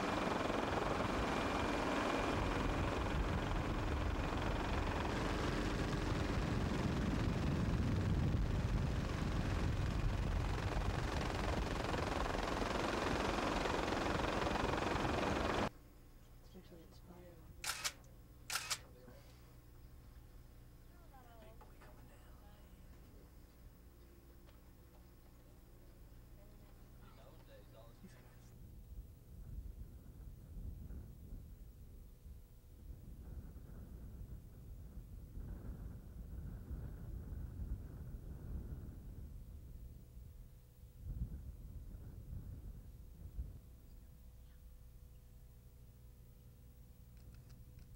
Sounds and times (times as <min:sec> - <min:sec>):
Speech: 0:16.4 - 0:17.6, 0:20.9 - 0:22.9, 0:26.4 - 0:28.6.